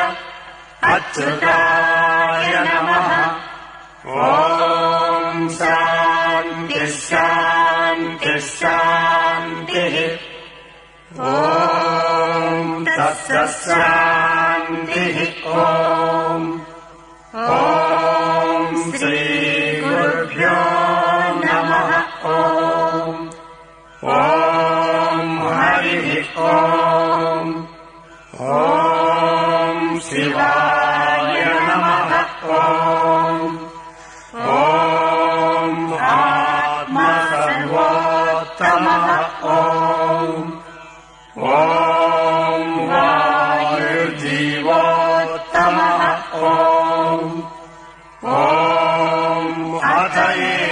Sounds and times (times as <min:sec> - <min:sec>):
Mantra: 0:00.0 - 0:50.7.